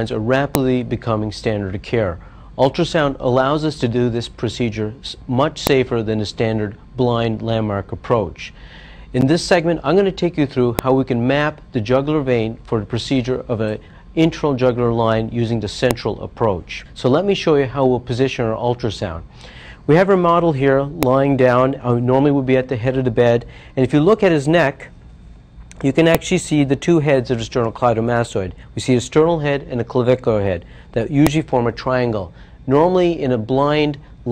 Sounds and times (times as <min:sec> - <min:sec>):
Speech: 0:00.0 - 0:19.3, 0:19.9 - 0:24.9, 0:25.8 - 0:34.3.